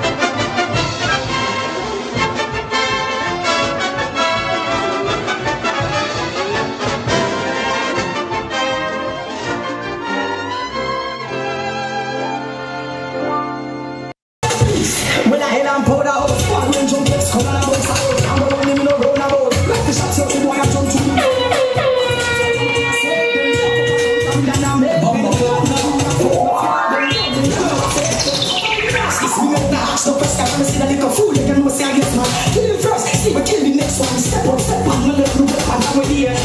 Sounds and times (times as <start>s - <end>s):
Music: 0.0s - 36.4s.